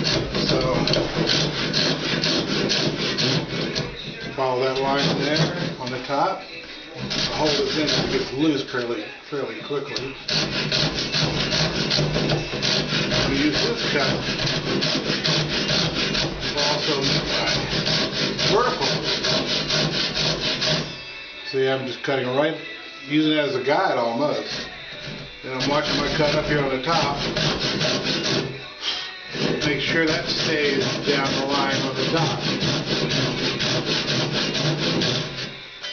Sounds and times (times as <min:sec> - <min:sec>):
Wood: 0:00.0 - 0:06.0, 0:07.0 - 0:08.3, 0:09.9 - 0:20.9, 0:24.4 - 0:28.6, 0:29.4 - 0:35.6
Sawing: 0:00.0 - 0:21.3, 0:22.6 - 0:35.9.